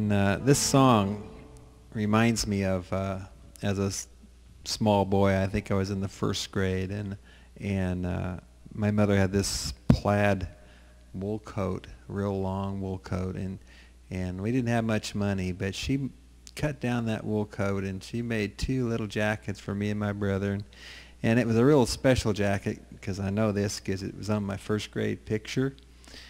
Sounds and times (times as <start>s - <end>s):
Speech: 0.0s - 25.8s.